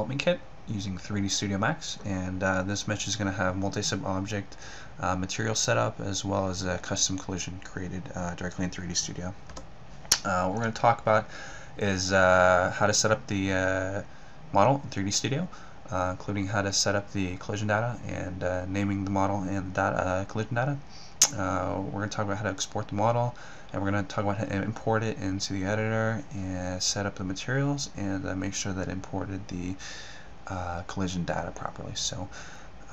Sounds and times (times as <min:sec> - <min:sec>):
Speech: 0:00.0 - 0:09.4, 0:10.1 - 0:29.8, 0:30.5 - 0:32.3.